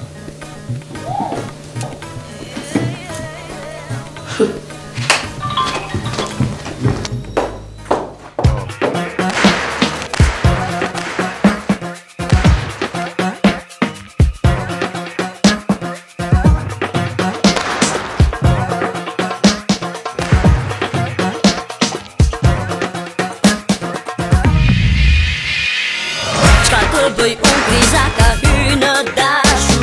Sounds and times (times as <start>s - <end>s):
Music: 0.0s - 29.8s.